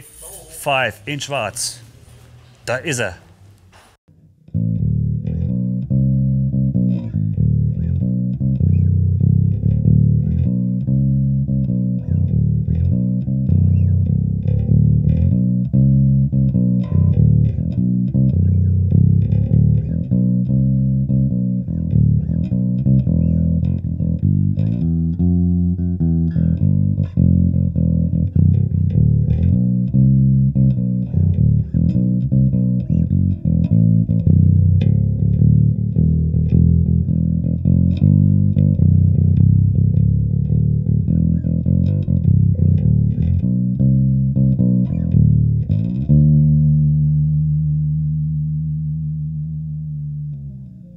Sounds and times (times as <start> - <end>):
Music: 4.1 - 50.9.